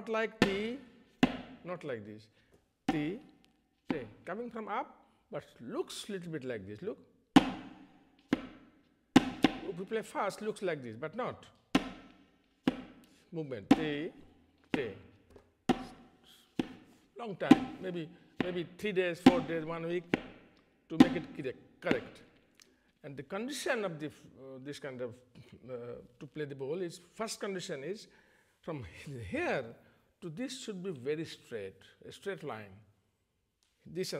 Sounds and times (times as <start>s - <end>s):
Speech: 0.0s - 0.8s, 1.6s - 2.3s, 2.9s - 3.3s, 3.9s - 7.0s, 9.6s - 11.6s, 13.3s - 14.2s, 14.8s - 15.1s, 17.2s - 20.1s, 20.9s - 22.2s, 23.0s - 32.9s, 33.8s - 34.2s.